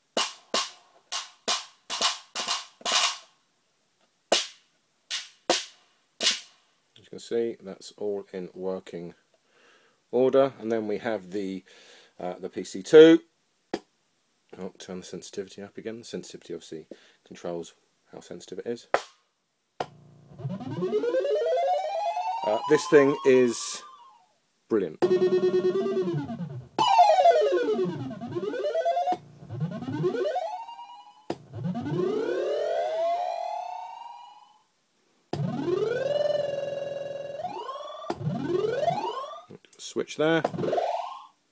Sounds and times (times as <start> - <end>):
Speech: 7.0 - 9.2, 10.1 - 13.3, 14.5 - 18.9, 22.4 - 23.8, 24.7 - 25.0, 39.5 - 40.5.